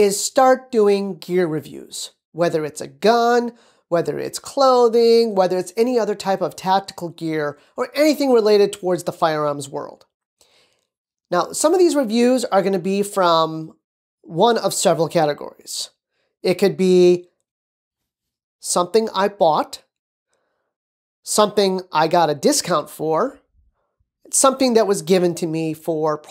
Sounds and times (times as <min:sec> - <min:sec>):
Speech: 0:00.0 - 0:10.0, 0:11.3 - 0:17.3, 0:18.6 - 0:19.9, 0:21.3 - 0:23.4, 0:24.3 - 0:26.3.